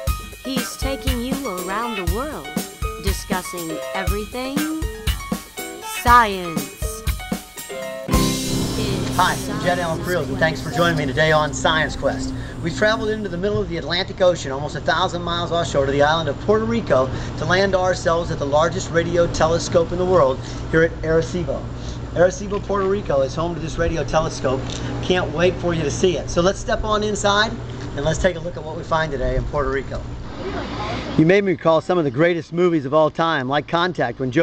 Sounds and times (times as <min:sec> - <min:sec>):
Speech: 0:00.5 - 0:04.8, 0:05.8 - 0:07.0, 0:08.8 - 0:21.6, 0:22.2 - 0:30.0, 0:31.2 - 0:34.4.